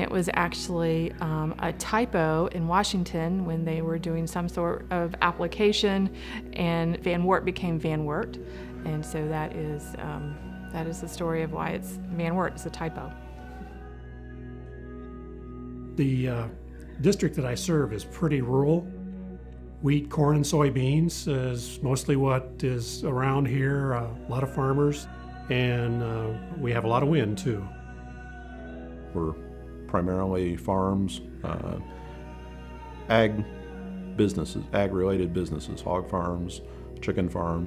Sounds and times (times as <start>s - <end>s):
Music: 0.0s - 37.6s.